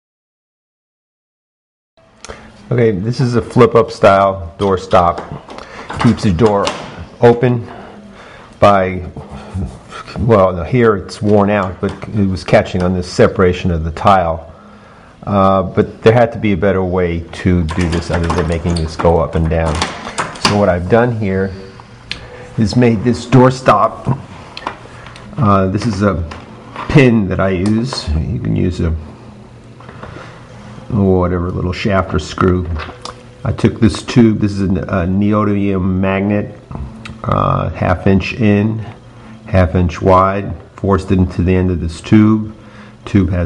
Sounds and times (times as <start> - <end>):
Speech: 2.7 - 5.4, 6.0 - 8.0, 8.6 - 14.5, 15.2 - 21.7, 22.6 - 24.2, 25.4 - 29.1, 30.9 - 43.4.